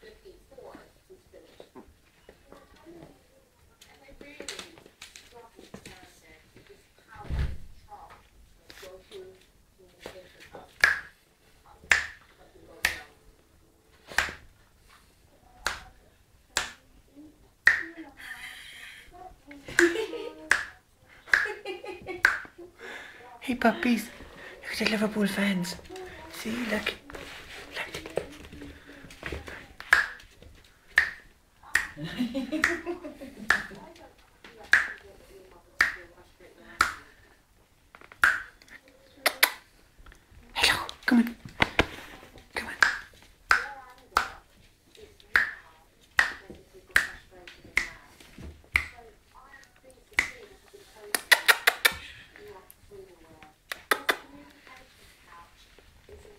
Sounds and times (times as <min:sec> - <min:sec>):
Inside, small room: 0:00.0 - 0:56.3
Speech: 0:23.2 - 0:29.8, 0:43.5 - 0:56.3.